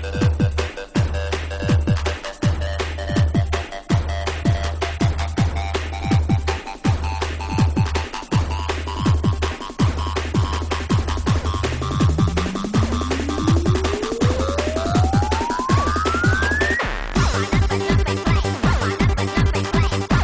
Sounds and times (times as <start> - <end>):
Techno: 0.0 - 20.2.